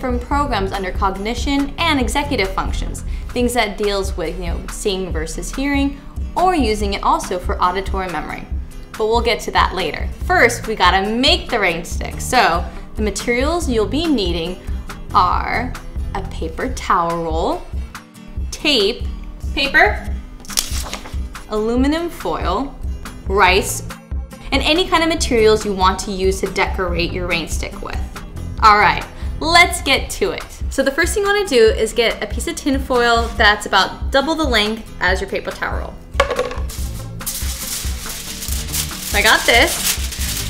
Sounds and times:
Speech: 0.0s - 8.4s, 9.0s - 17.6s, 18.5s - 19.0s, 19.6s - 20.1s, 21.5s - 22.7s, 23.3s - 23.9s, 24.5s - 28.0s, 28.6s - 36.0s, 39.1s - 39.8s
Music: 0.0s - 40.4s.

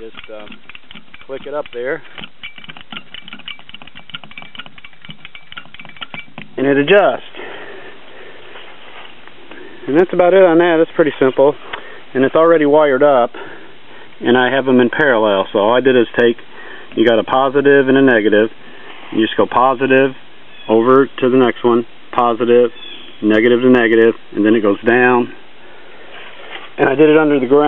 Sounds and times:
Speech: 0.0s - 0.5s, 1.3s - 2.1s, 6.6s - 7.3s, 9.9s - 11.6s, 12.2s - 13.4s, 14.2s - 16.4s, 17.0s - 18.5s, 19.2s - 25.4s, 26.8s - 27.6s
Outside, rural or natural: 0.0s - 27.6s.

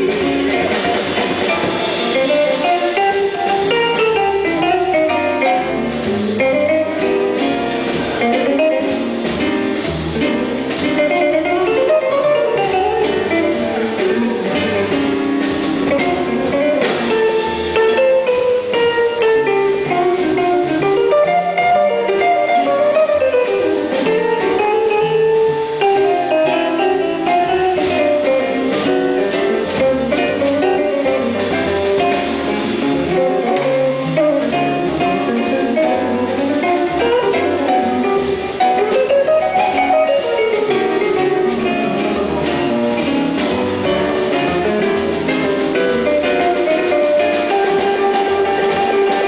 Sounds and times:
Drum: 0.0s - 49.2s
Drum kit: 0.0s - 49.2s
Jazz: 0.0s - 49.2s.

